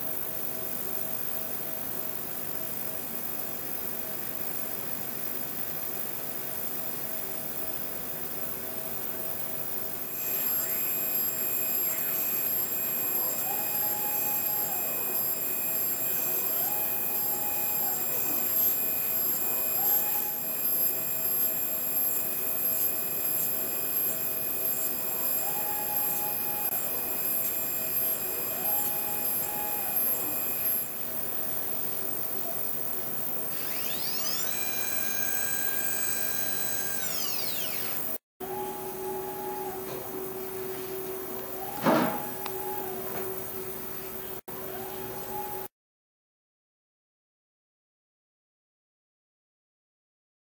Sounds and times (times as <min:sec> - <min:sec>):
Printer: 0:00.0 - 0:45.7.